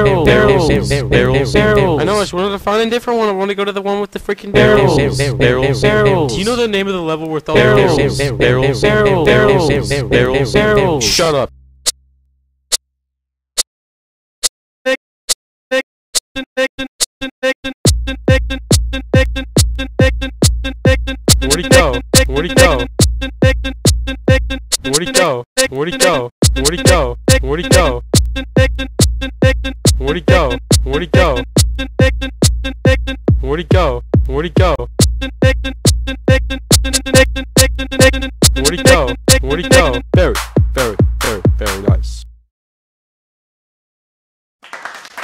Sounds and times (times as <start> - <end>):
Sampler: 4.6 - 6.6, 7.6 - 11.3, 36.7 - 40.1.